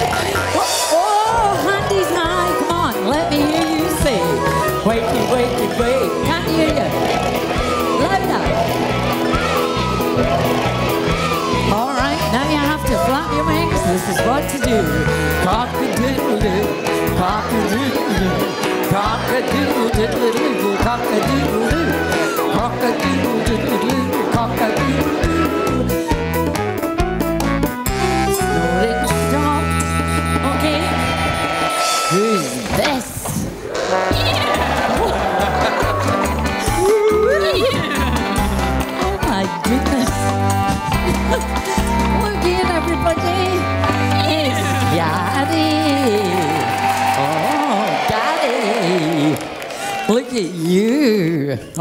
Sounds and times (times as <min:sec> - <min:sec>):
Music: 0:00.0 - 0:51.8
Female singing: 0:11.8 - 0:25.4.